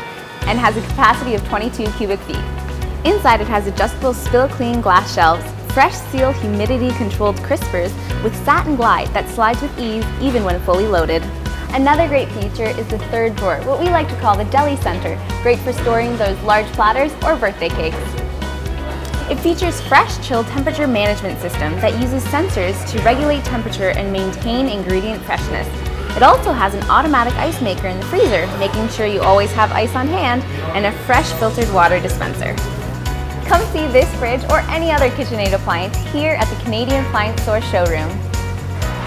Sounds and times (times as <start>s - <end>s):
Music: 0.0s - 39.0s
Speech: 0.5s - 2.4s, 3.1s - 18.1s, 19.3s - 32.6s, 33.5s - 38.2s.